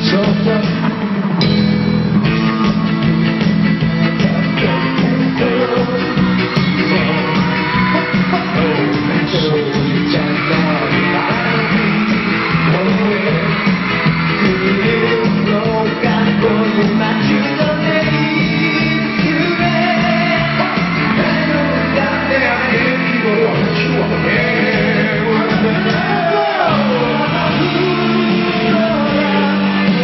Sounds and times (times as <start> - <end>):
Music: 0.0 - 30.0.